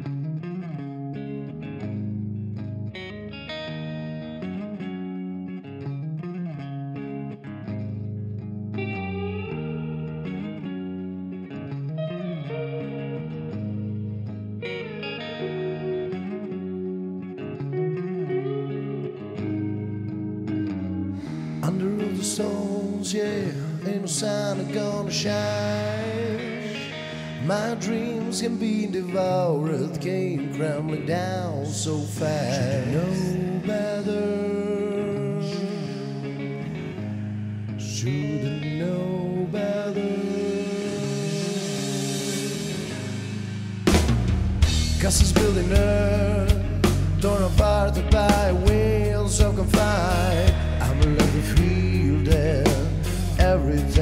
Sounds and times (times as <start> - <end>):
Electric guitar: 0.0 - 54.0.